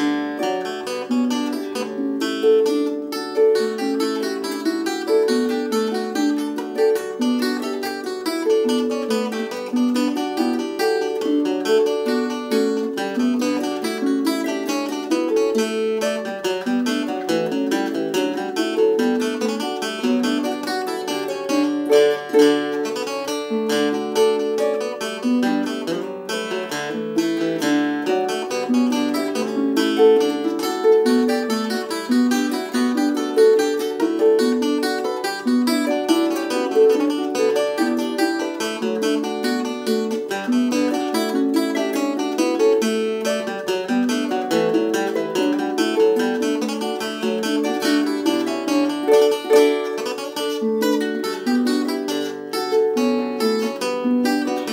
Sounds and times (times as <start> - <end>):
Guitar: 0.0 - 54.7.